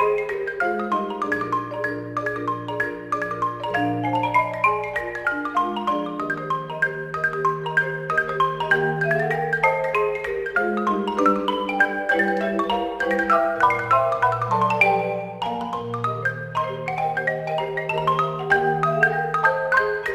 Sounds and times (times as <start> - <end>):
Marimba, xylophone: 0.0 - 20.1
Vibraphone: 0.0 - 20.1.